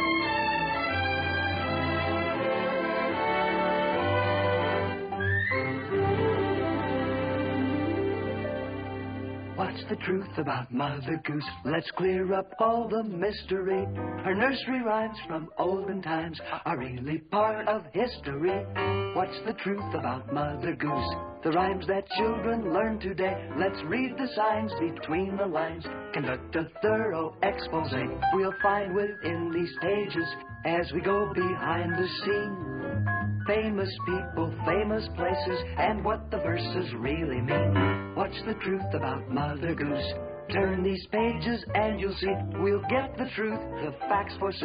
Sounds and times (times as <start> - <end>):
Music: 0.0 - 44.6.